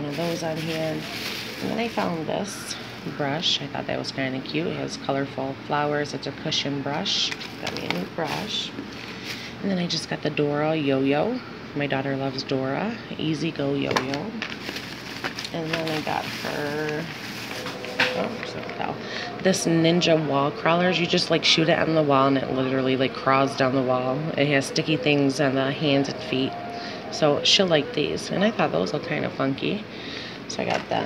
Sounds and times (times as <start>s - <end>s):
Speech: 0.0s - 8.8s, 9.6s - 14.4s, 15.5s - 17.1s, 18.1s - 29.9s, 30.5s - 31.0s.